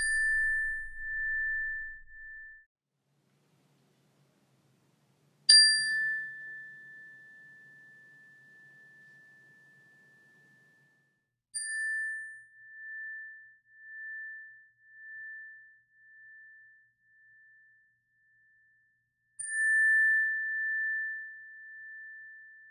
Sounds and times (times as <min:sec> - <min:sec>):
Tuning fork: 0:00.0 - 0:02.7, 0:05.4 - 0:22.7.